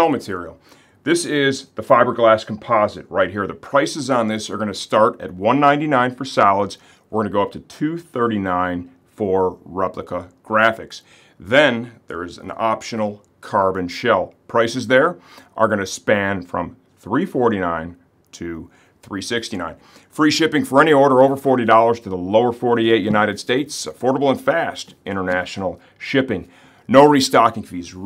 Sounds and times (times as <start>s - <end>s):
Speech: 0.0s - 28.0s.